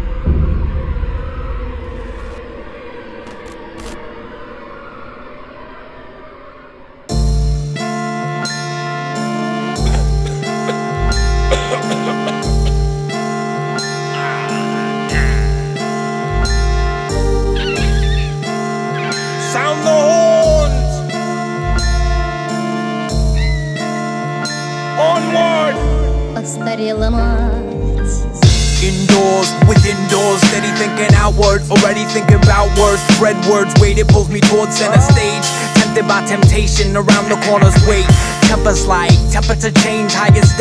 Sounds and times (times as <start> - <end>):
Music: 0.0 - 2.7, 7.1 - 40.6.